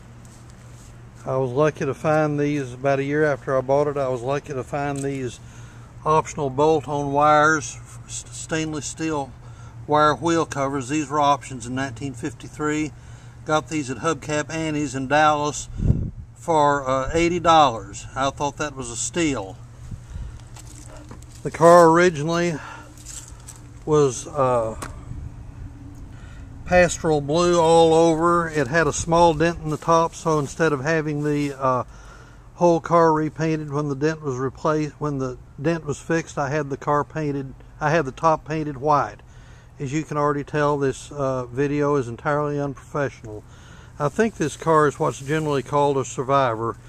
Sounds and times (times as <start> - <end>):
Speech: 1.2 - 5.4, 6.0 - 15.7, 16.4 - 19.6, 21.4 - 22.8, 23.8 - 24.9, 26.7 - 31.9, 32.6 - 39.2, 39.8 - 43.4, 44.0 - 46.8.